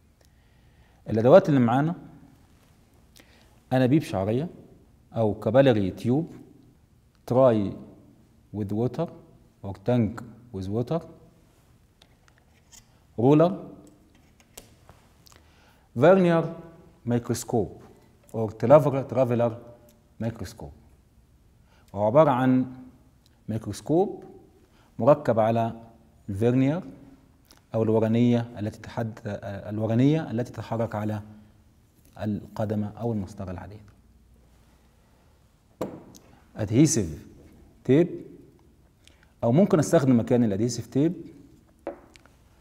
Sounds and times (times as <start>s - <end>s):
Speech: 1.1s - 2.1s, 3.7s - 6.4s, 7.3s - 7.9s, 8.5s - 11.2s, 13.2s - 13.7s, 16.0s - 20.8s, 21.9s - 22.9s, 23.5s - 24.3s, 25.0s - 27.0s, 27.7s - 31.3s, 32.2s - 33.9s, 36.6s - 38.3s, 39.4s - 41.3s.